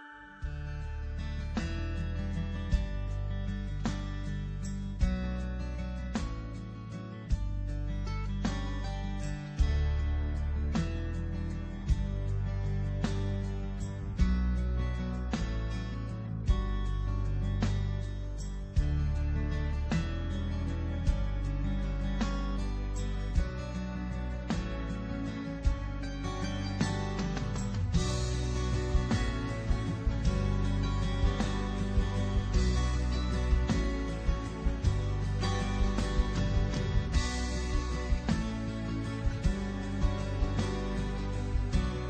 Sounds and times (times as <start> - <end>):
Music: 0.0 - 42.0.